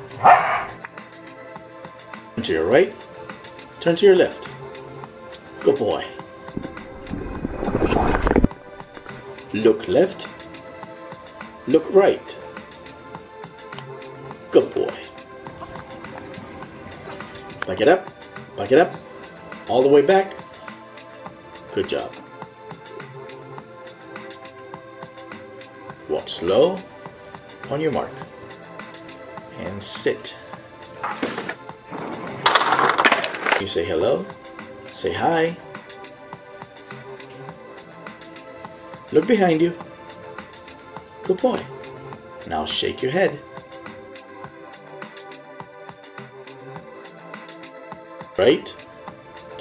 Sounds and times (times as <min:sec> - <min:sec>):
Music: 0:00.0 - 0:49.6
Speech: 0:02.4 - 0:03.0, 0:03.8 - 0:04.5, 0:05.6 - 0:06.2, 0:09.5 - 0:10.3, 0:11.7 - 0:12.4, 0:14.5 - 0:15.1, 0:17.7 - 0:19.0, 0:19.7 - 0:20.4, 0:21.7 - 0:22.2, 0:26.1 - 0:26.9, 0:27.7 - 0:28.2, 0:29.5 - 0:30.4, 0:33.6 - 0:34.3, 0:34.9 - 0:35.6, 0:39.1 - 0:39.8, 0:41.2 - 0:41.7, 0:42.5 - 0:43.4, 0:48.4 - 0:48.8.